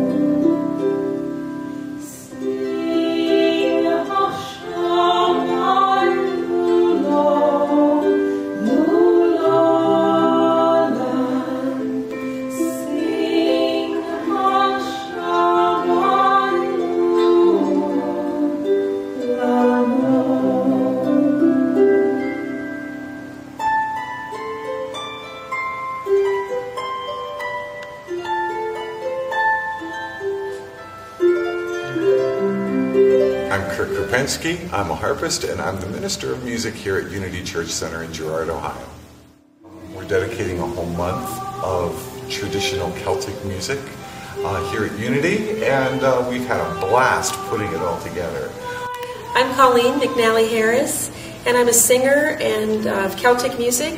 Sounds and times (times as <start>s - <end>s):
Sad music: 0.0s - 51.5s.